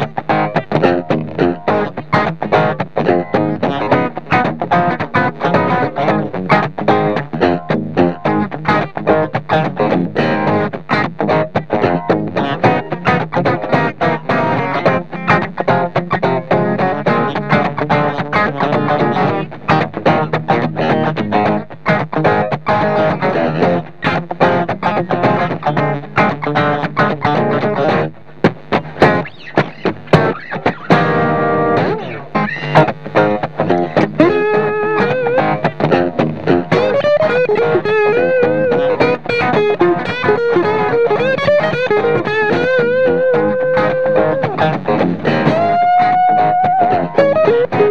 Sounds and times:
Guitar: 0.0 - 47.9.

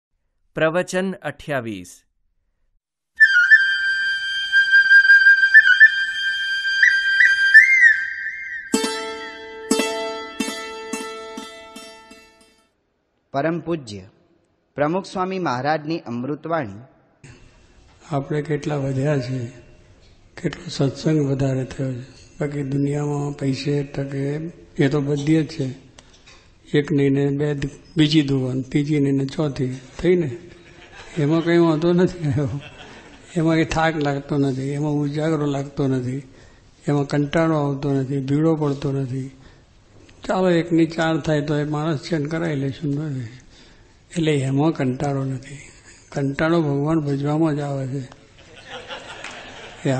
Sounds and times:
Speech: 0.6 - 2.0, 13.3 - 14.2, 14.8 - 16.9, 18.0 - 19.7, 20.4 - 25.9, 26.7 - 30.4, 31.1 - 32.7, 33.3 - 39.4, 40.2 - 43.4, 44.1 - 48.1
Flute: 3.2 - 10.2.

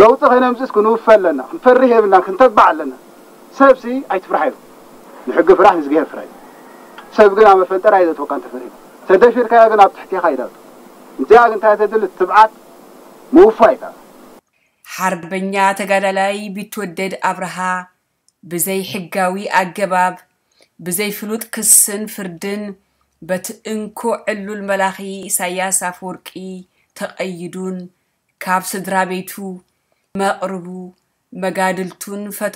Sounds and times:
Male speech, man speaking: 0.0 - 3.0, 3.6 - 4.6, 5.2 - 6.3, 7.1 - 10.6, 11.2 - 12.5, 13.3 - 14.0.

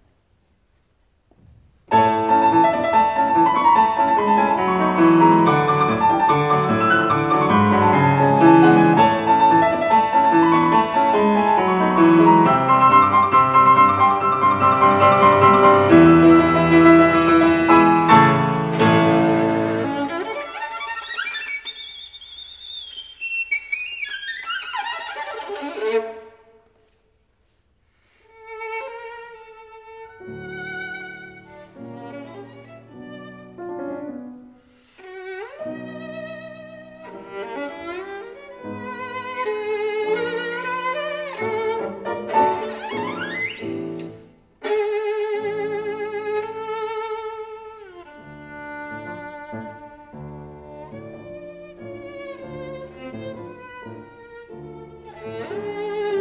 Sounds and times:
Violin, fiddle: 1.9 - 26.6, 28.1 - 34.1, 34.9 - 56.2.

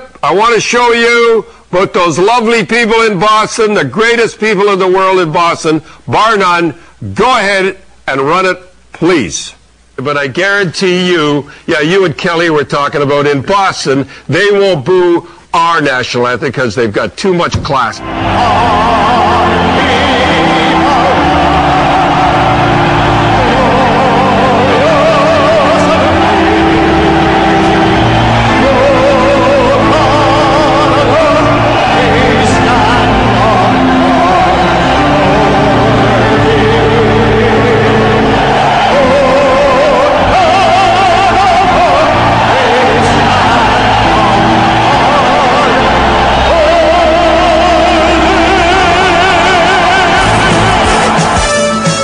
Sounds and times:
Music: 17.9 - 52.0.

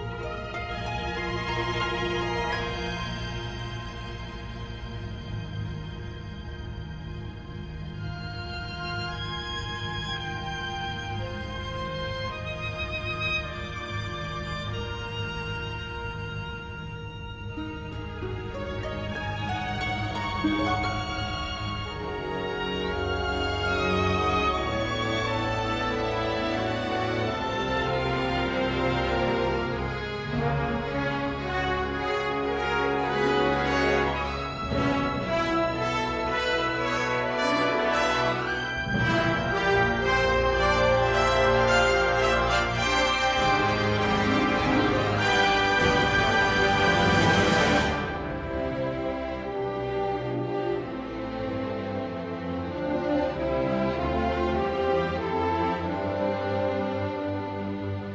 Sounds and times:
Music: 0.0 - 58.1.

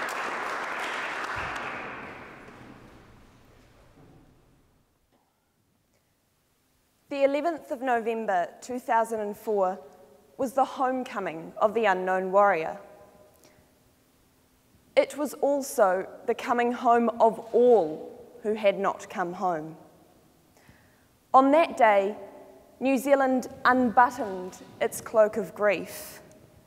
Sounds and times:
Narration, monologue: 5.8 - 26.6
Female speech, woman speaking: 7.1 - 9.8, 10.4 - 12.8, 15.0 - 19.8, 21.4 - 22.2, 22.8 - 26.2.

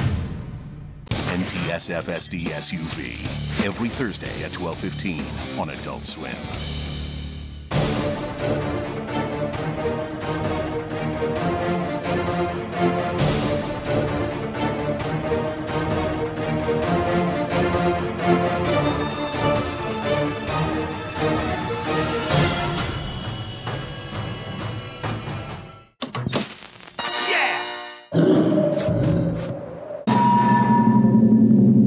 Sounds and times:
Music: 0.0 - 26.0, 27.0 - 28.1.

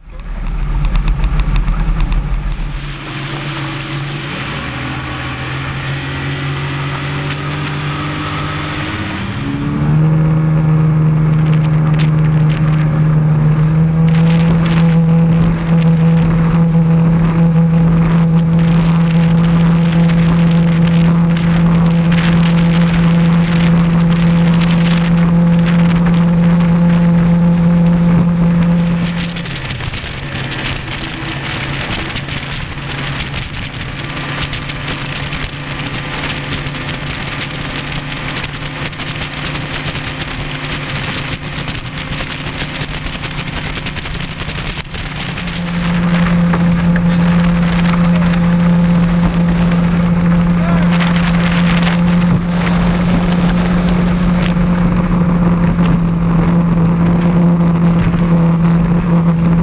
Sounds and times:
Motorboat, speedboat: 0.0 - 59.6.

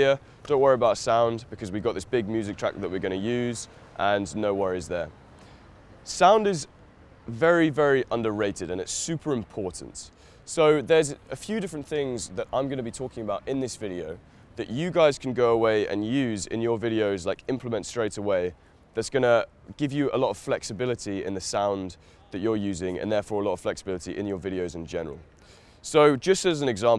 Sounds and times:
Speech: 0.0 - 5.1, 6.0 - 6.7, 7.3 - 26.9.

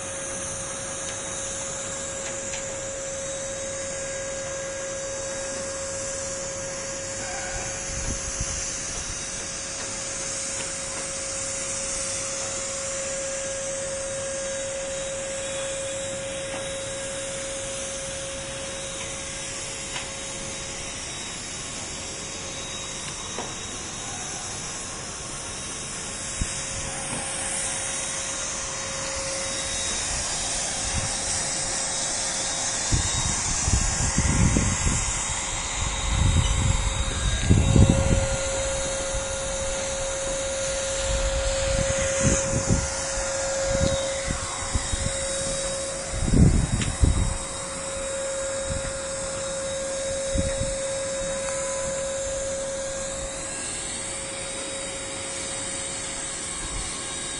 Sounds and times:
Spray: 0.0 - 57.3.

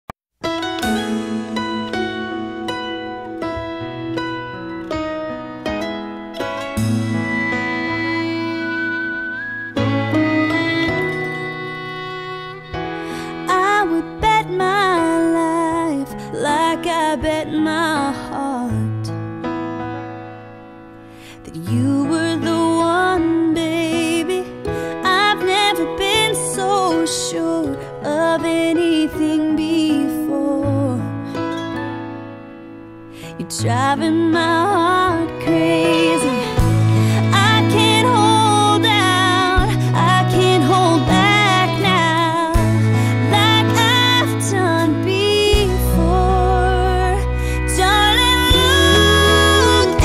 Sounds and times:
Tender music: 0.4 - 50.0.

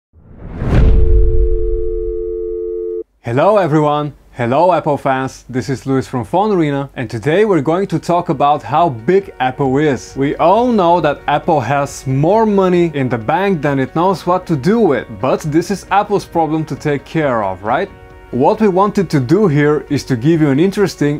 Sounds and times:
Speech: 3.2 - 21.1
Music: 8.3 - 21.1.

